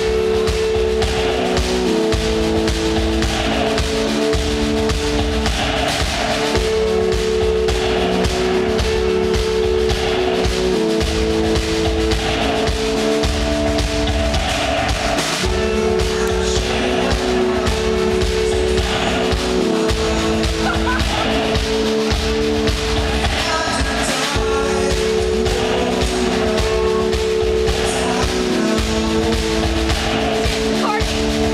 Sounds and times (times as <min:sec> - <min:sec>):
Music: 0:00.0 - 0:31.5.